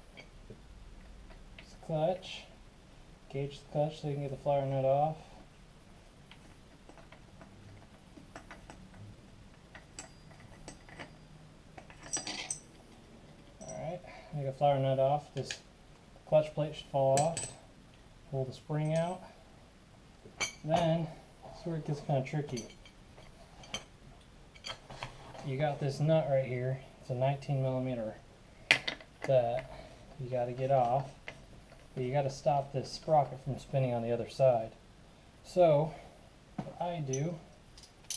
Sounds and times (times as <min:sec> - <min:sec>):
Inside, small room: 0:00.0 - 0:38.1
Speech: 0:01.7 - 0:02.5, 0:03.3 - 0:05.3, 0:13.7 - 0:15.6, 0:16.3 - 0:17.4, 0:18.3 - 0:19.3, 0:20.7 - 0:22.7, 0:25.4 - 0:28.2, 0:29.2 - 0:31.1, 0:32.0 - 0:34.8, 0:35.4 - 0:36.0, 0:36.7 - 0:37.5.